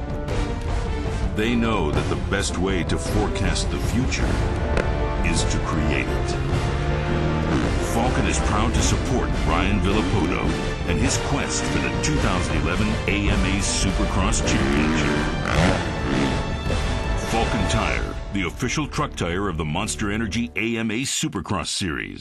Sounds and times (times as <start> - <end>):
Music: 0.0 - 22.2
Speech: 1.4 - 4.4, 5.2 - 6.4, 7.9 - 15.3, 17.2 - 22.2
Vehicle: 14.5 - 16.7.